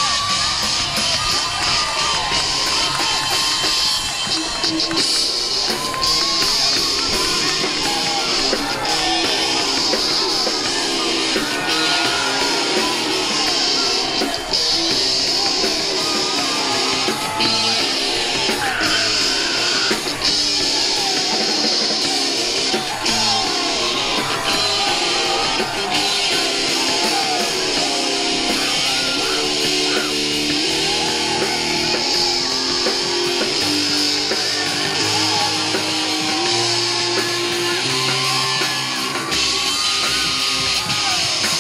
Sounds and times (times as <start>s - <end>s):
Rhythm and blues: 0.0s - 41.6s.